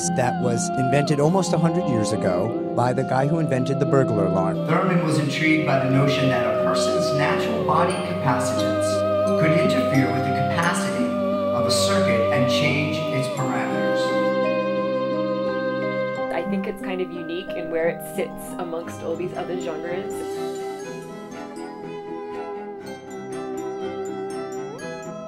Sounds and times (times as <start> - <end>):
Speech: 0.0 - 14.2, 16.3 - 20.6
Music: 0.0 - 25.2.